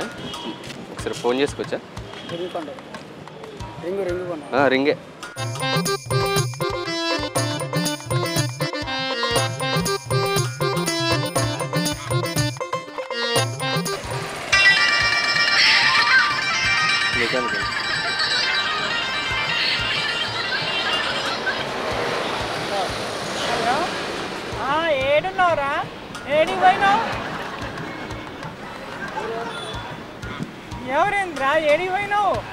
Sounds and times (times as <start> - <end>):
Funny music: 5.3 - 23.1, 24.5 - 32.5.